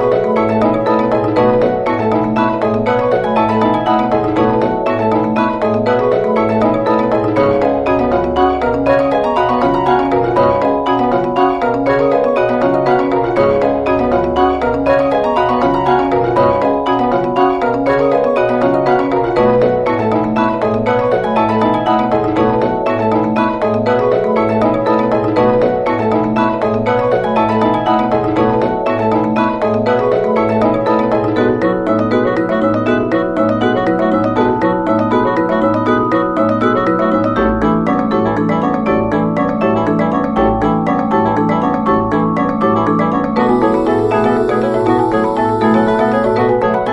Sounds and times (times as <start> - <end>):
Marimba, xylophone: 0.0 - 46.9.